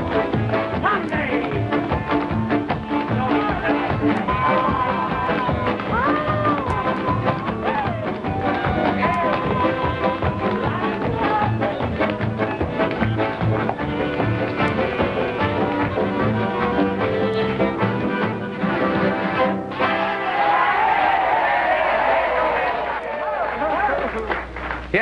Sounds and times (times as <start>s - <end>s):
Music: 0.0s - 23.5s.